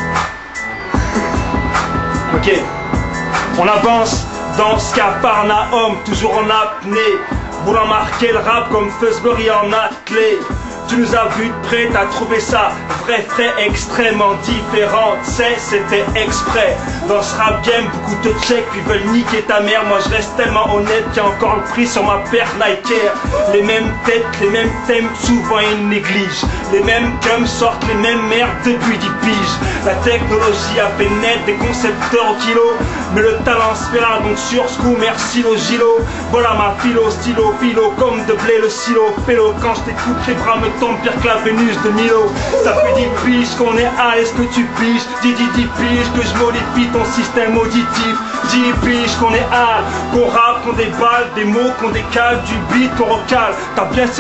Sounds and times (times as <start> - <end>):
Music: 0.0 - 54.2.